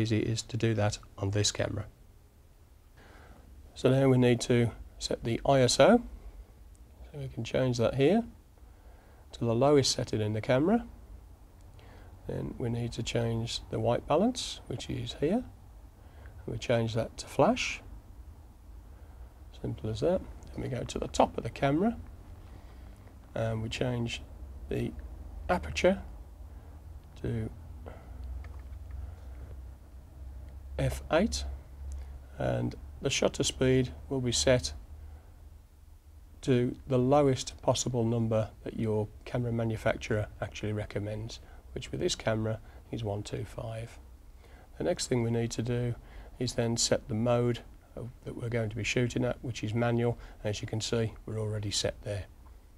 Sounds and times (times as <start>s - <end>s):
Speech: 0.0s - 2.0s, 3.7s - 6.1s, 7.0s - 8.4s, 9.3s - 11.0s, 12.2s - 15.5s, 16.4s - 17.9s, 19.5s - 22.1s, 23.3s - 26.1s, 27.2s - 27.6s, 30.8s - 31.6s, 32.4s - 34.8s, 36.4s - 44.0s, 44.8s - 52.3s.